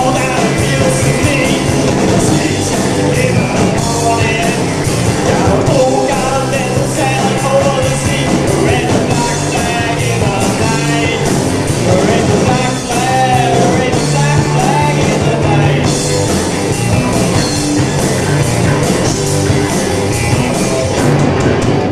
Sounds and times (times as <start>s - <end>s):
Singing: 0.0s - 16.0s
Music: 0.0s - 21.9s.